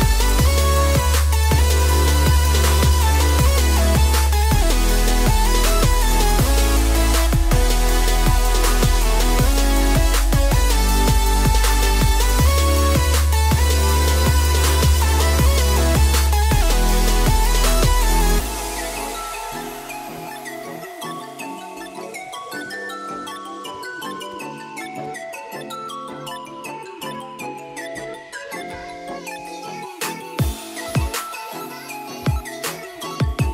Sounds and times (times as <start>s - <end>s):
Music: 0.0s - 33.5s.